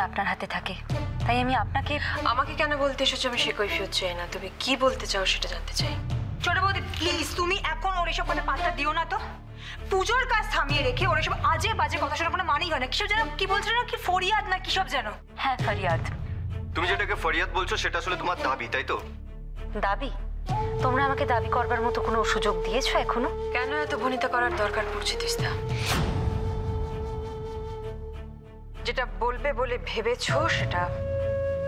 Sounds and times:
Music: 0.0 - 31.6.

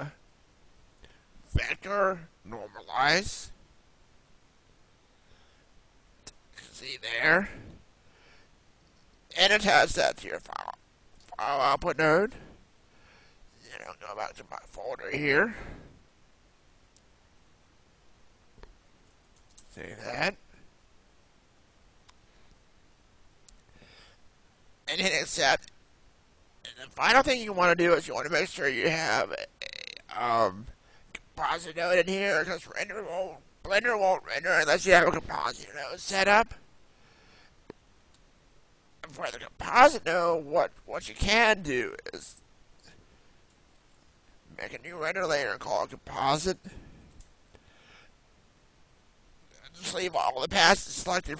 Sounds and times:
Speech: 0.0 - 0.2, 1.5 - 3.6, 6.6 - 7.6, 9.3 - 12.5, 13.6 - 15.8, 19.7 - 20.4, 24.9 - 25.7, 26.6 - 30.8, 31.4 - 36.6, 39.0 - 42.4, 44.5 - 46.8, 49.6 - 51.3.

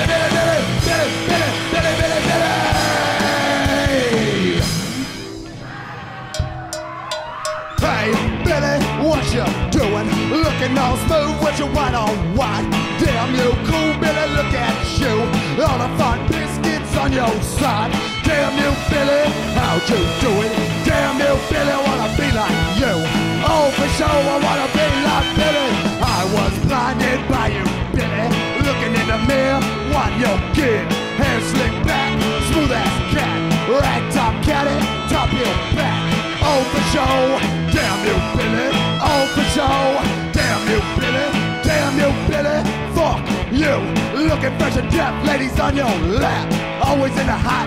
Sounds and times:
Music: 0.0 - 47.6.

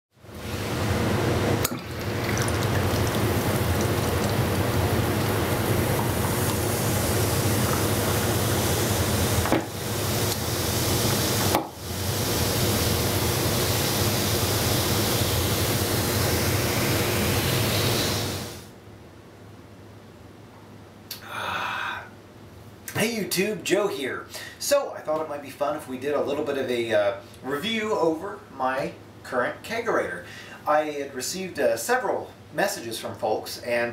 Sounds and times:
Inside, small room: 0.1 - 33.9
Water tap, faucet: 1.6 - 18.7.

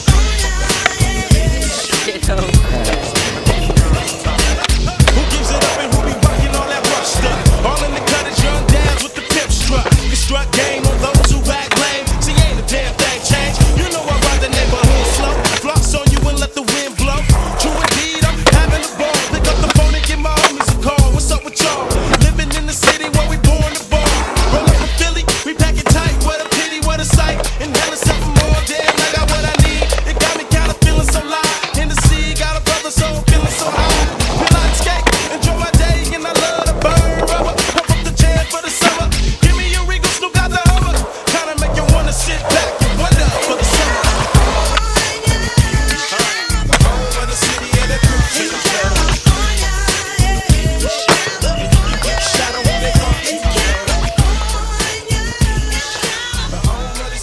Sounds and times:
Music: 0.0 - 57.2
Skateboard: 0.0 - 57.2.

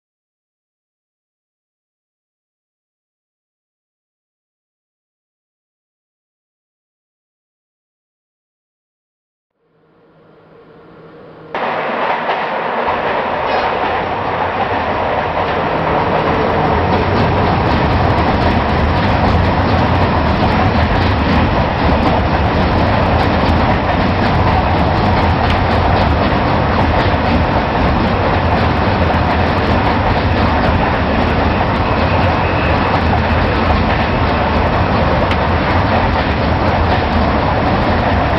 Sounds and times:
Train: 9.6 - 38.3
Railroad car, train wagon: 9.8 - 38.3
Clickety-clack: 11.6 - 38.3.

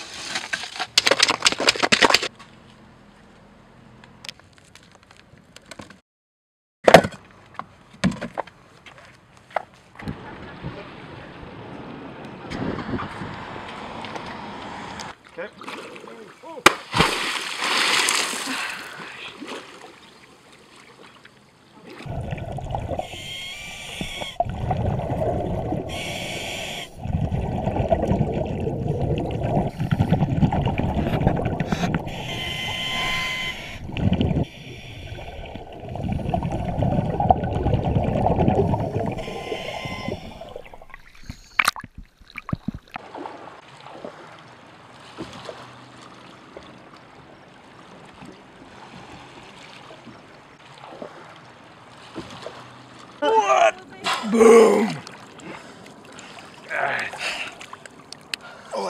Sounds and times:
Splash, splatter: 15.6 - 20.0, 42.4 - 46.1, 50.6 - 52.7.

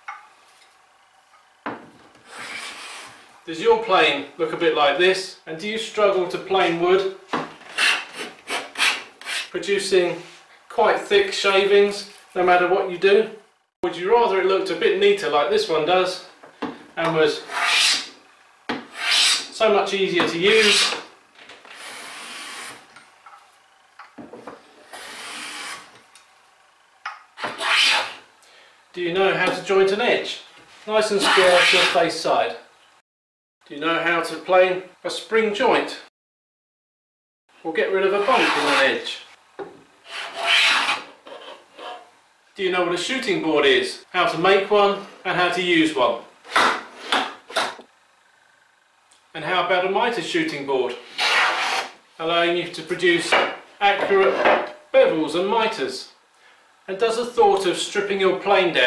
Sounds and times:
Filing (rasp): 2.2 - 3.2, 7.7 - 9.6, 17.4 - 18.2, 18.8 - 19.6, 20.5 - 21.1, 21.8 - 22.9, 24.8 - 25.9, 27.4 - 28.2, 31.2 - 32.0, 38.1 - 38.9, 40.0 - 42.1, 51.1 - 52.0.

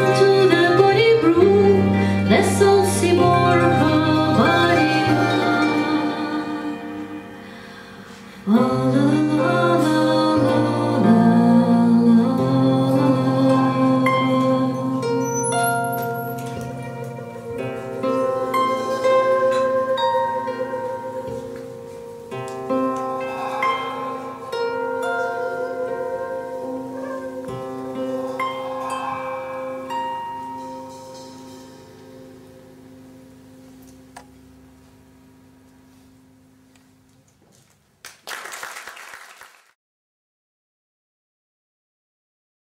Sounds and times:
Harp: 0.0 - 34.0.

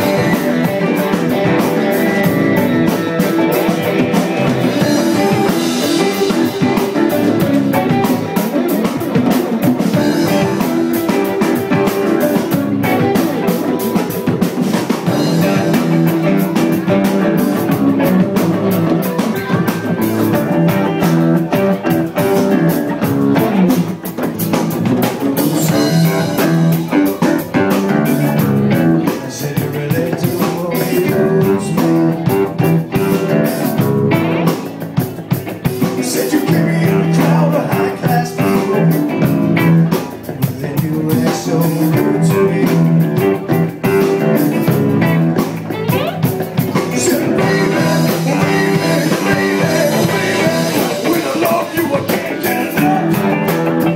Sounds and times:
Blues: 0.0 - 53.9
Singing: 29.1 - 32.4, 35.8 - 39.0, 46.8 - 53.9.

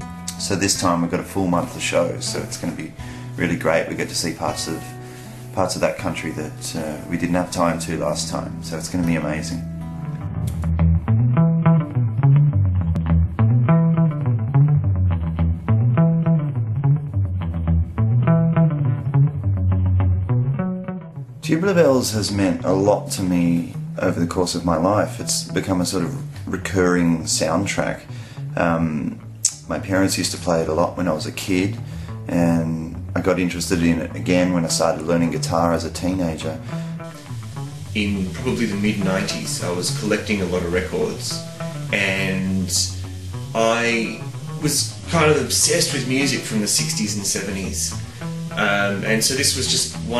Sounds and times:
Music: 0.0 - 50.2
Speech: 0.3 - 4.9, 5.6 - 9.6, 21.4 - 36.6, 38.0 - 43.0, 43.6 - 50.2.

